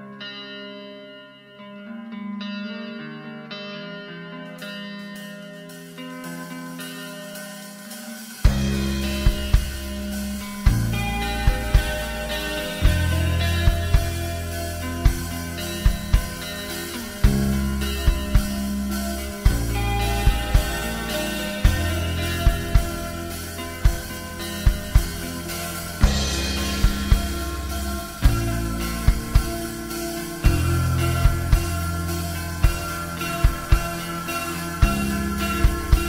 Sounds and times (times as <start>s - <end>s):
Music: 0.0s - 36.0s.